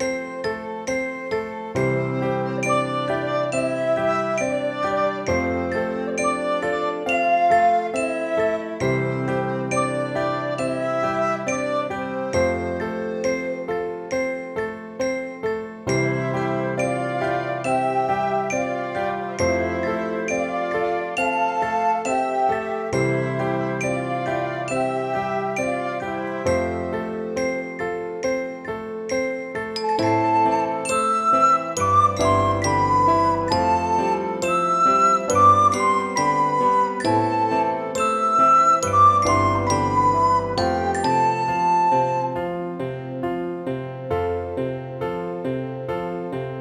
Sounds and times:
Flute: 0.0 - 43.7.

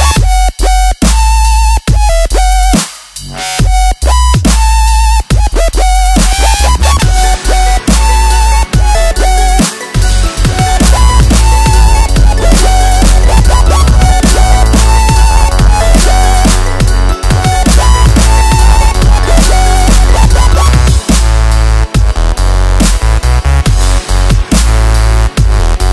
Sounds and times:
Drum and bass: 0.0 - 25.9.

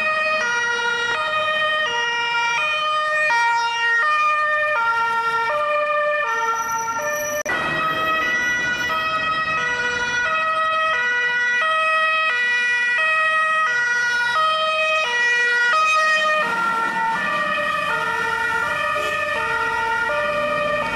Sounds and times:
Ambulance (siren): 0.0 - 20.9.

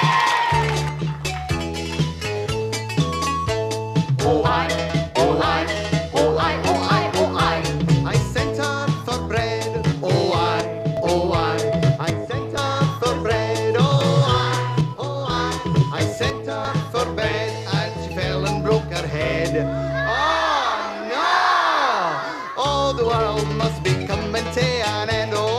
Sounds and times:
Music: 0.0 - 25.5
Male singing: 4.2 - 19.7, 22.6 - 25.5.

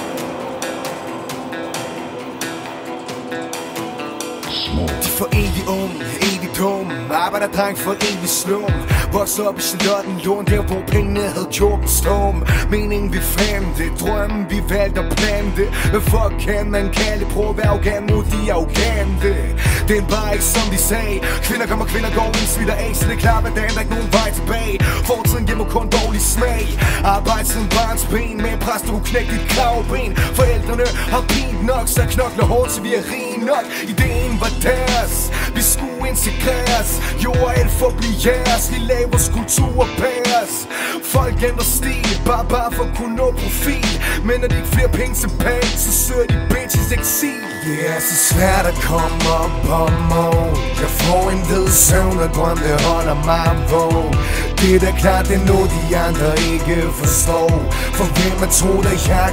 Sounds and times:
Rhythm and blues: 0.0 - 59.3.

